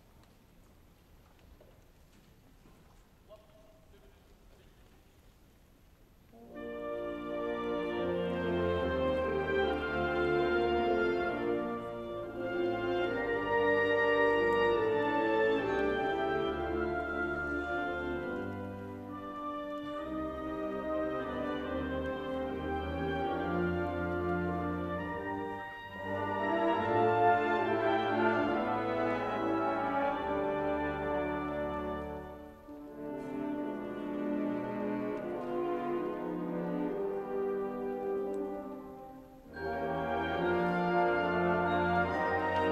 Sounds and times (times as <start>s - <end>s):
Music: 6.2s - 42.7s.